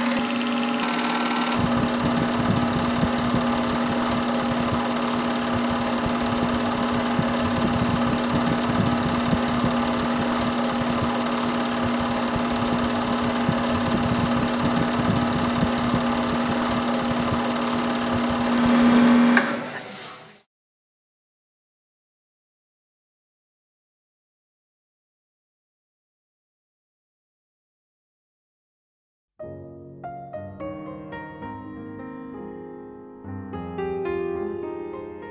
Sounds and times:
Music: 0:29.4 - 0:35.3.

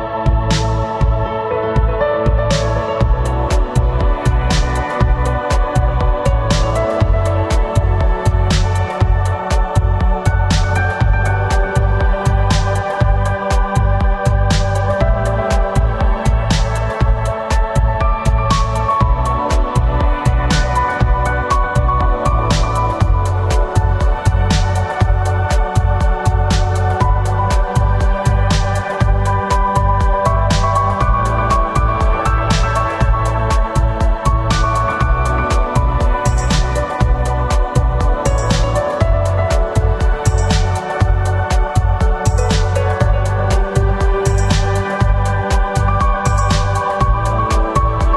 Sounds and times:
Music: 0:00.0 - 0:48.1.

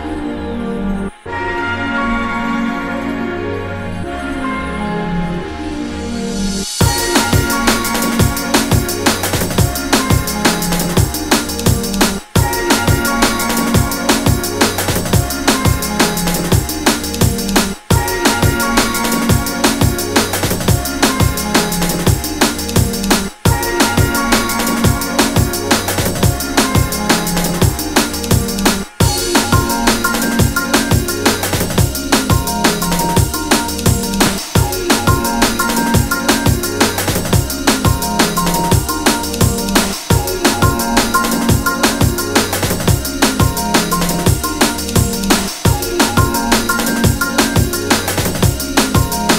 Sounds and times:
Drum and bass: 0:00.0 - 0:49.3.

